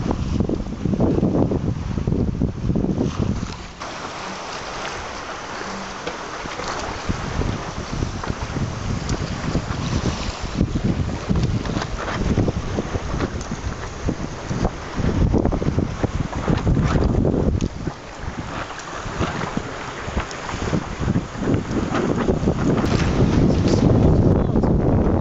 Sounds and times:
Wind noise (microphone): 0.0 - 3.9, 6.4 - 25.2
Sailboat, sailing ship: 0.0 - 25.2.

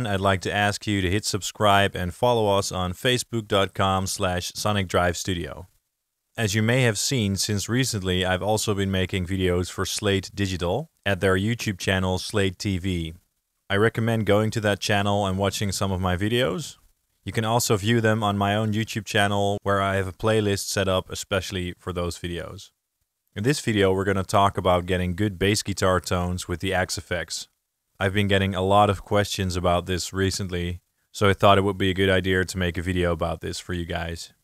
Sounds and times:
Speech: 0.0 - 5.7, 6.4 - 22.8, 23.4 - 34.4.

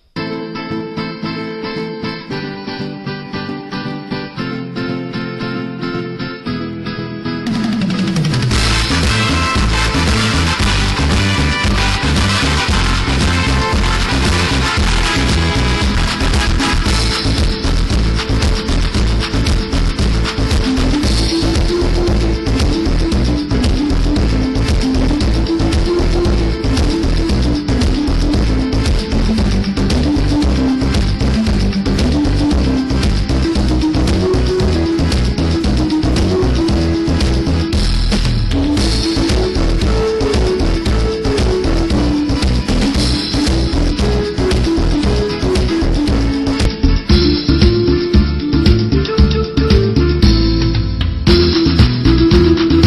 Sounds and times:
Music: 0.0 - 52.8.

